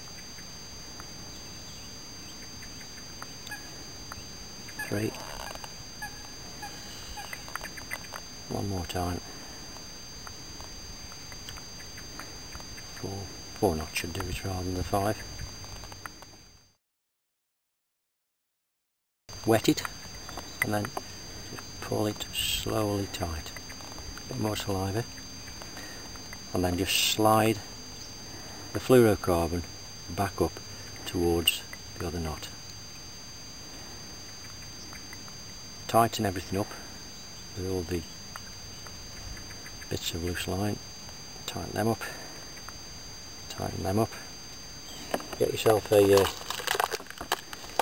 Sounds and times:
Outside, rural or natural: 0:00.0 - 0:16.8, 0:19.3 - 0:47.8
Speech: 0:04.8 - 0:05.2, 0:08.5 - 0:09.3, 0:13.0 - 0:15.2, 0:19.4 - 0:19.9, 0:20.6 - 0:20.9, 0:21.8 - 0:23.5, 0:24.3 - 0:25.1, 0:26.5 - 0:27.7, 0:28.8 - 0:32.6, 0:35.9 - 0:36.8, 0:37.6 - 0:38.1, 0:39.9 - 0:40.8, 0:41.5 - 0:42.2, 0:43.5 - 0:44.3, 0:45.4 - 0:46.4.

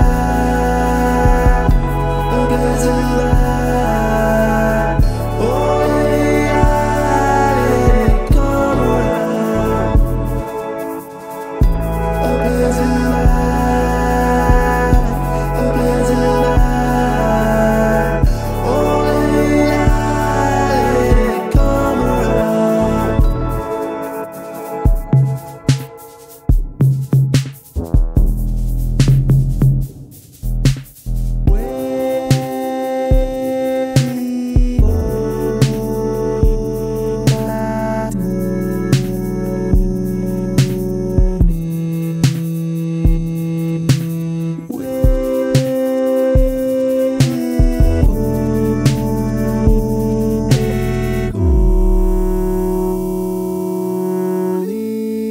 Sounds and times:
Drum machine: 0:00.0 - 0:00.5, 0:01.2 - 0:02.4, 0:03.2 - 0:03.8, 0:05.0 - 0:15.9, 0:16.6 - 0:17.0, 0:18.2 - 0:53.7
Sampler: 0:00.0 - 0:55.3.

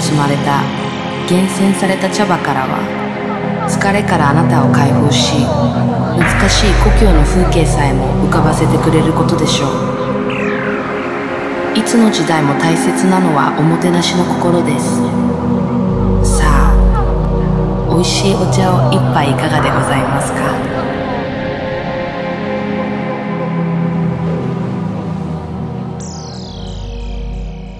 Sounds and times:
Speech: 0:00.0 - 0:10.0, 0:11.7 - 0:15.3, 0:16.2 - 0:21.1
Music: 0:00.0 - 0:27.7.

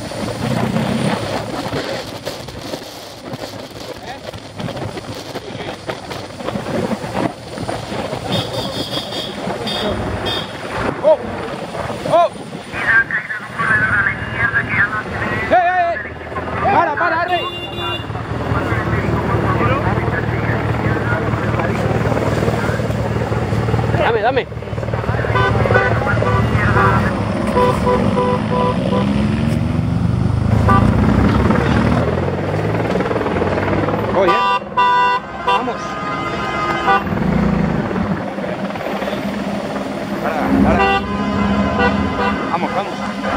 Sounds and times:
Speech: 0:12.1 - 0:17.8, 0:18.5 - 0:22.9, 0:23.9 - 0:27.2, 0:42.5 - 0:43.0.

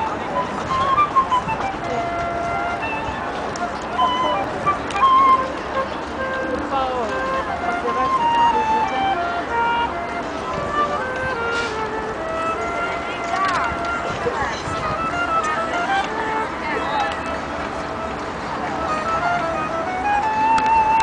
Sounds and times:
Flute: 0:00.0 - 0:21.0
Speech: 0:06.5 - 0:09.0, 0:13.0 - 0:17.5.

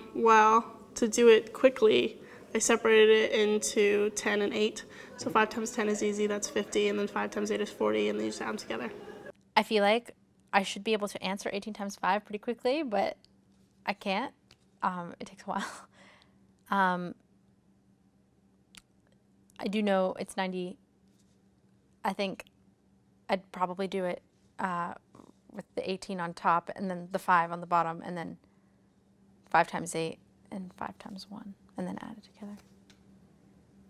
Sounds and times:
Speech: 0:00.0 - 0:13.2, 0:13.9 - 0:15.8, 0:19.6 - 0:20.8, 0:22.1 - 0:22.4, 0:23.3 - 0:25.0, 0:25.6 - 0:28.4, 0:29.5 - 0:32.6.

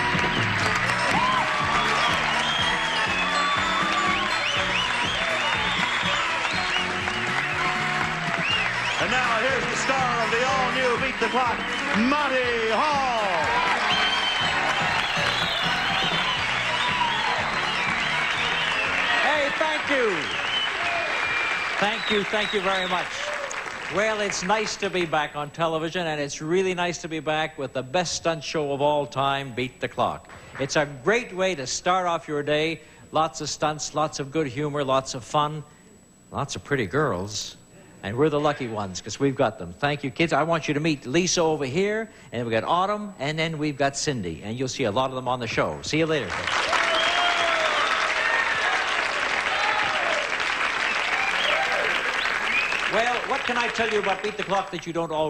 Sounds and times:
Music: 0:00.0 - 0:23.0
Speech: 0:23.9 - 0:35.7, 0:36.3 - 0:46.4, 0:52.9 - 0:55.3.

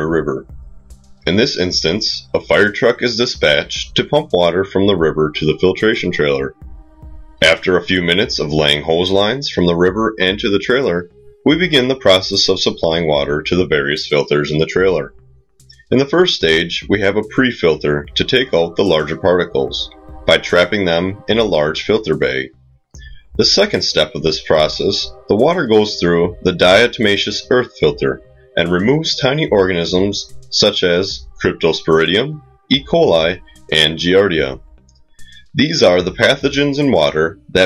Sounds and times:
Speech: 0:00.0 - 0:00.5, 0:01.3 - 0:06.6, 0:07.4 - 0:15.2, 0:15.9 - 0:34.6, 0:35.3 - 0:37.6
Music: 0:00.0 - 0:37.6.

